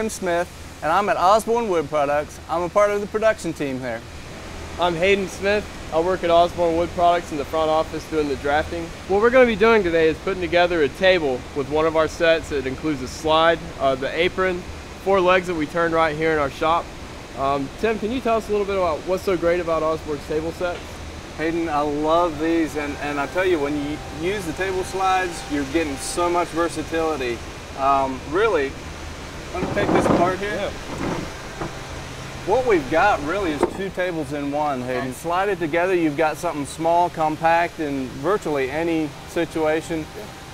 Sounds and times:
Speech: 0.0 - 4.1, 4.8 - 16.8, 17.4 - 28.8, 29.6 - 30.8, 32.5 - 40.3.

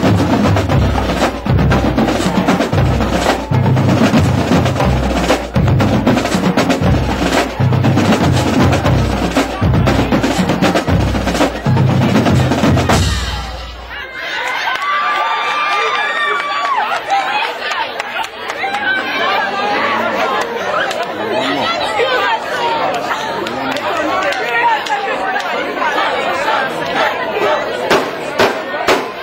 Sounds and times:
Percussion: 0.0 - 14.1
Speech: 2.0 - 29.2.

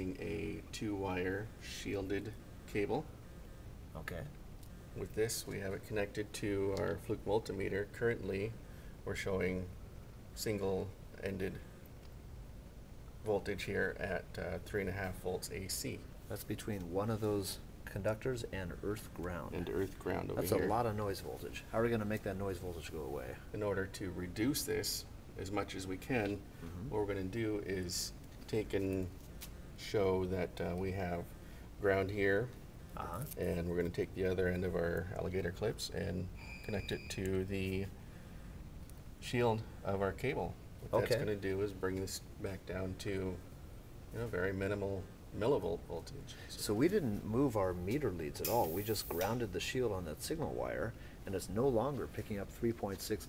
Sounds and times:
Speech: 0.0 - 3.1, 4.0 - 4.4, 5.0 - 9.8, 10.4 - 11.7, 13.2 - 29.2, 29.8 - 38.0, 39.2 - 43.4, 44.1 - 53.2.

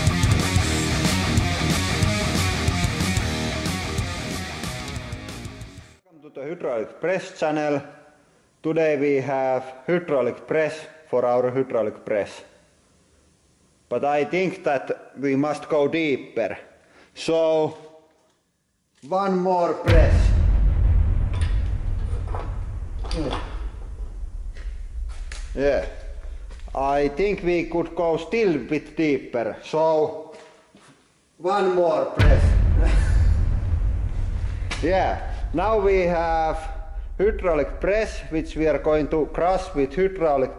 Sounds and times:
Speech: 6.1 - 8.0, 8.6 - 12.5, 13.9 - 17.8, 19.0 - 20.4, 23.1 - 23.5, 25.6 - 26.0, 26.7 - 30.3, 31.4 - 32.6, 34.8 - 40.5.

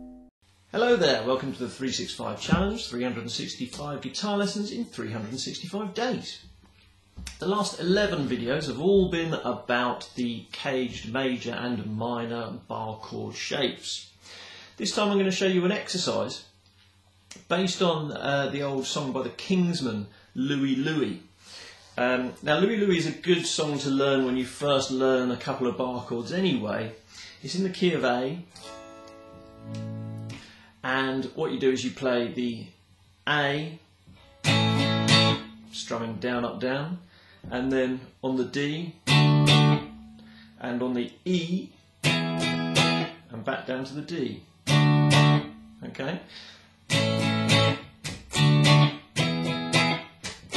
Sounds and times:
Speech: 0.7 - 6.5, 7.3 - 14.1, 14.8 - 16.5, 17.3 - 21.3, 22.0 - 28.5, 30.8 - 33.9, 35.7 - 39.1, 40.6 - 41.8, 43.3 - 44.5, 45.8 - 46.3
Strum: 6.4 - 9.4, 34.1 - 36.0, 39.1 - 40.8, 44.6 - 45.8, 46.9 - 50.5
Electric guitar: 28.6 - 30.5, 34.1 - 35.7, 39.0 - 40.4, 42.0 - 43.2, 44.6 - 45.6, 46.9 - 50.5.

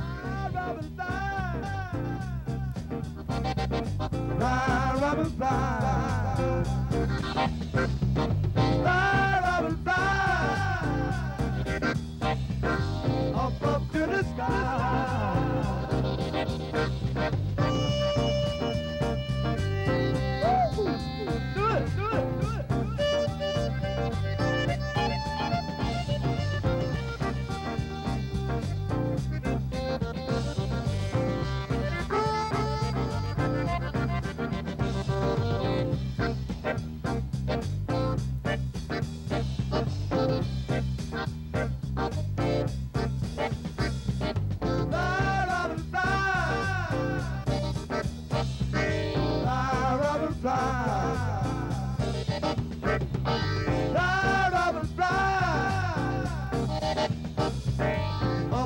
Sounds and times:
Jazz: 0.0 - 58.6.

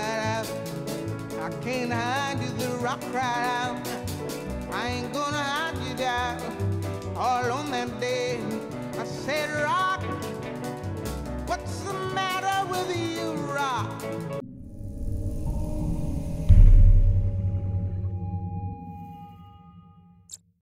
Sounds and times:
Music: 0.0 - 20.5.

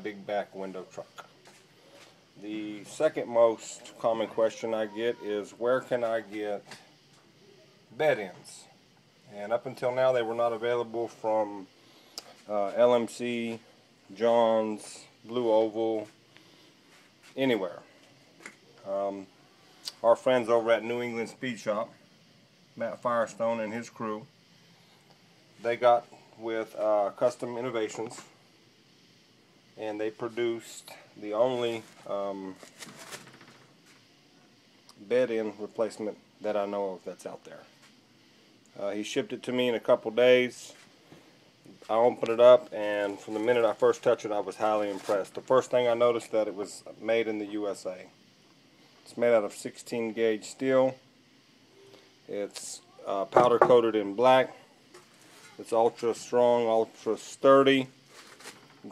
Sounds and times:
Speech: 0.0 - 1.3, 2.4 - 6.8, 7.5 - 11.7, 12.5 - 16.2, 17.4 - 17.9, 18.8 - 19.3, 19.9 - 22.0, 22.8 - 24.3, 25.6 - 28.4, 29.8 - 32.6, 34.9 - 37.7, 38.7 - 40.8, 41.8 - 48.1, 49.1 - 51.0, 52.3 - 54.6, 55.4 - 58.0.

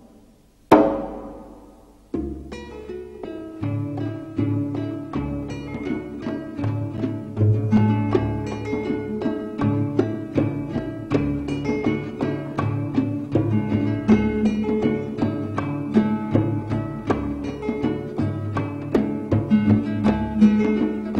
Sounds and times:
Music: 0.0 - 21.1.

